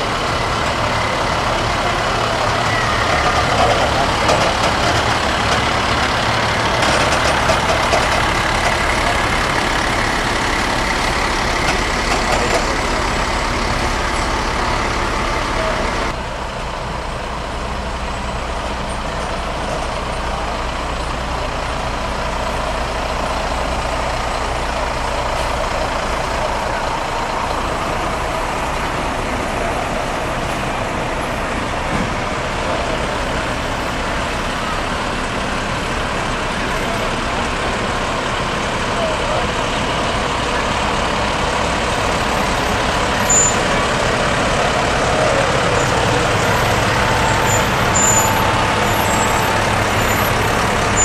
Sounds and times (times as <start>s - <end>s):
Traffic noise, roadway noise: 0.0s - 51.0s
Truck: 0.0s - 51.0s.